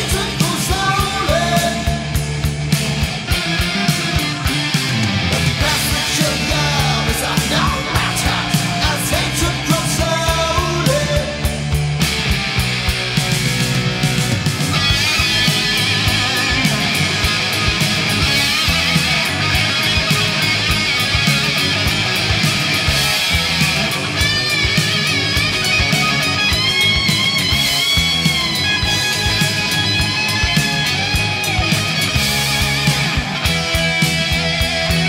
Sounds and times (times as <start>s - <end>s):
Music: 0.0s - 35.0s.